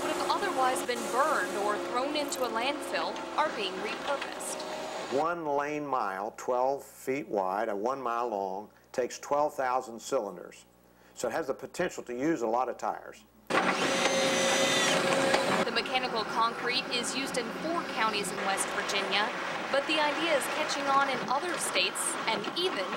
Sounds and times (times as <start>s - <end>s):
Speech: 0.0s - 13.3s, 15.7s - 22.9s
Drill: 13.5s - 15.7s.